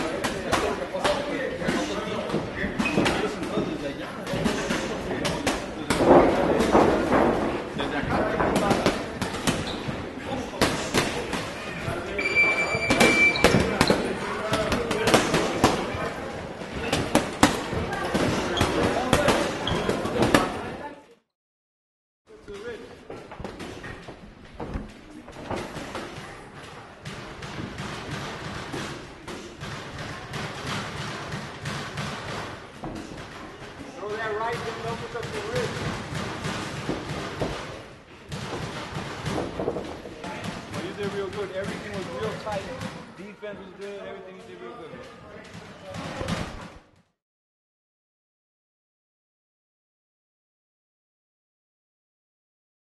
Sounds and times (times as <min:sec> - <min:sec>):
Inside, large room or hall: 0:00.0 - 0:21.2, 0:22.3 - 0:47.2.